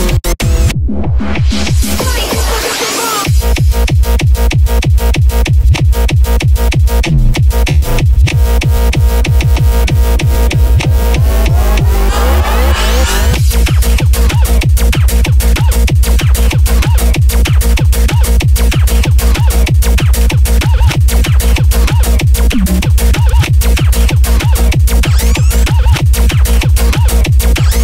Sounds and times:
Music: 0.0 - 27.8.

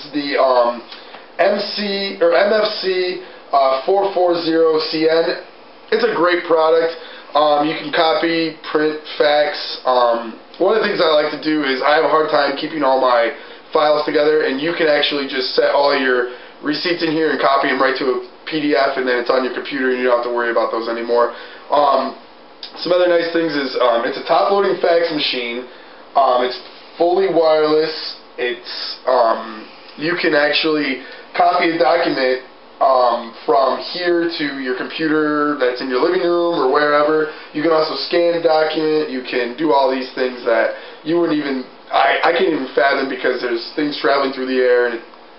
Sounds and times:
Speech: 0.0 - 45.1.

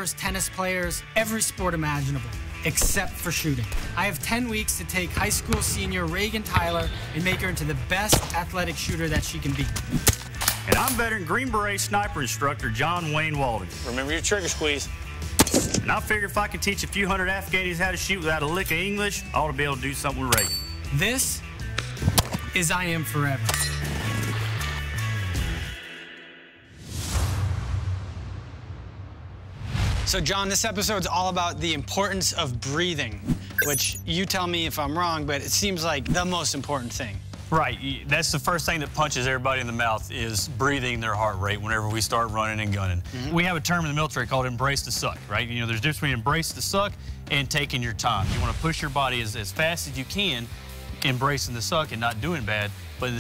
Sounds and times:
Speech: 0.0 - 9.8, 10.7 - 14.9, 15.8 - 21.4, 22.6 - 23.5, 30.1 - 53.2
Music: 0.0 - 53.2.

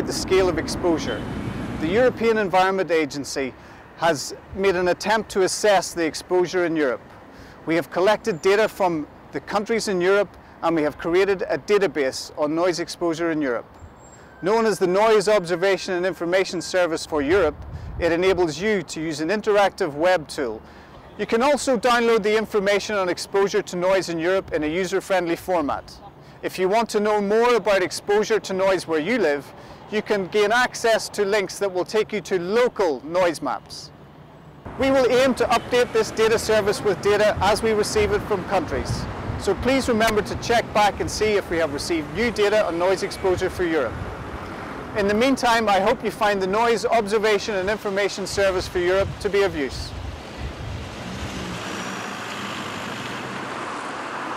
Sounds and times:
Speech: 0.0 - 1.2, 1.8 - 7.0, 7.7 - 13.6, 14.4 - 20.6, 21.2 - 33.9, 34.8 - 43.9, 45.0 - 49.9.

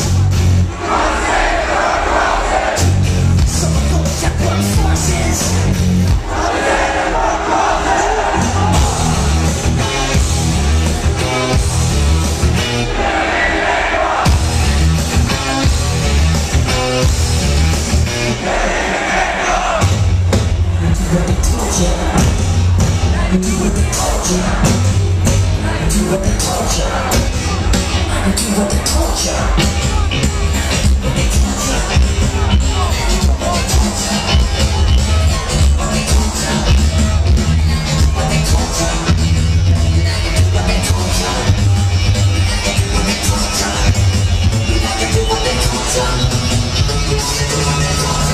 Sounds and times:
Rhythm and blues: 0.0 - 48.3.

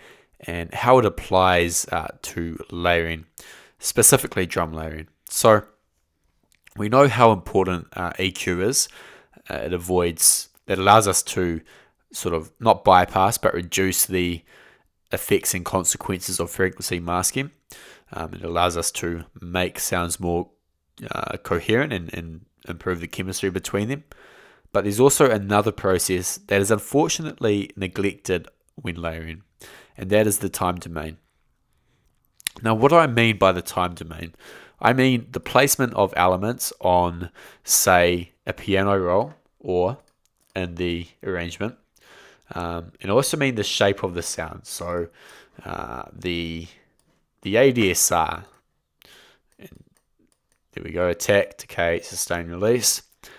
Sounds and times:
Speech: 0.4 - 5.8, 6.7 - 14.5, 15.1 - 24.1, 24.7 - 31.2, 32.4 - 41.8, 42.5 - 46.8, 47.4 - 48.6, 49.6 - 49.9, 50.8 - 53.1.

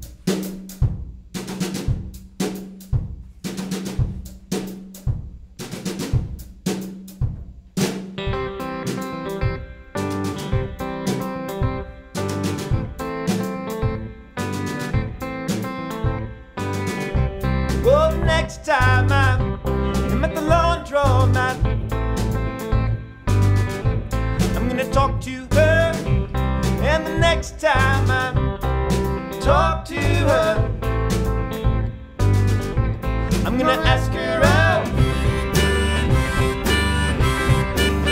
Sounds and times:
Bass drum: 0.0 - 8.6, 10.3 - 14.1, 14.8 - 38.1
Drum kit: 0.0 - 38.1.

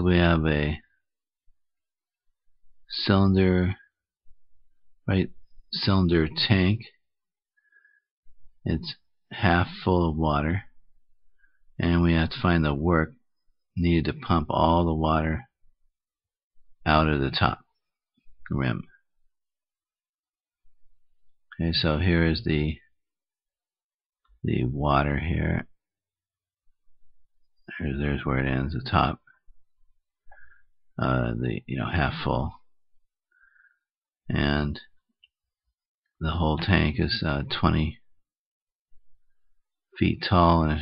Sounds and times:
Speech: 0.0 - 0.9, 2.9 - 4.0, 5.1 - 7.0, 8.6 - 10.8, 11.8 - 13.2, 13.8 - 15.6, 16.8 - 17.7, 18.4 - 19.0, 21.5 - 22.9, 24.4 - 25.8, 27.7 - 29.3, 31.0 - 32.7, 34.3 - 35.0, 36.2 - 38.2, 40.0 - 40.8.

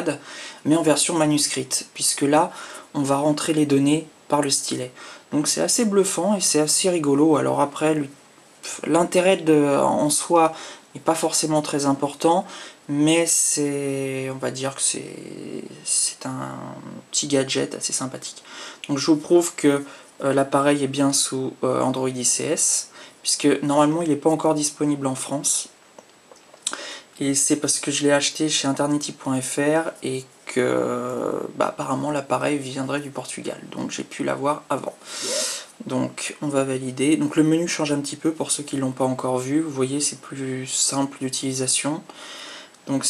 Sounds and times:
Speech: 0.0 - 25.8, 26.7 - 42.2, 42.8 - 43.1.

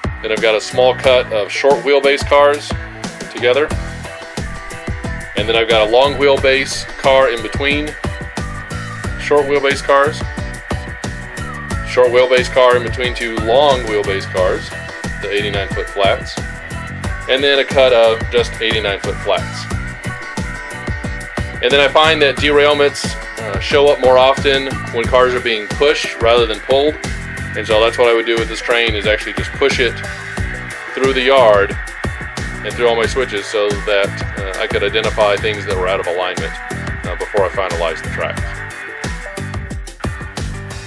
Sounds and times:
Music: 0.0 - 40.8
Speech: 0.2 - 3.7, 5.4 - 8.0, 9.2 - 10.3, 11.9 - 16.4, 17.3 - 19.7, 21.6 - 27.0, 27.6 - 30.1, 30.9 - 31.8, 32.6 - 38.6.

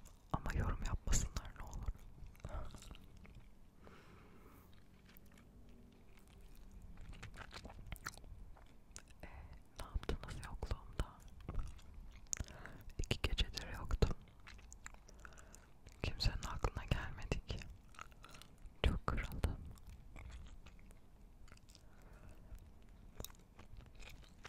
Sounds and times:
Chewing, mastication: 0.0 - 24.4
Whispering: 0.3 - 3.0, 9.2 - 11.3, 12.8 - 14.2, 16.0 - 17.7, 18.8 - 19.7.

